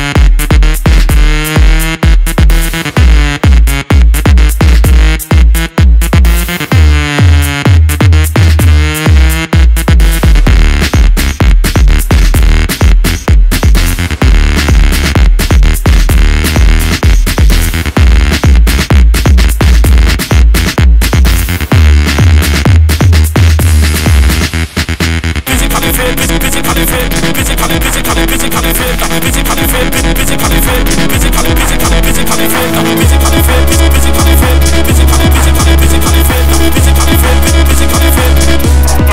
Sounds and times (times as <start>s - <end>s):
House music: 0.0s - 39.1s.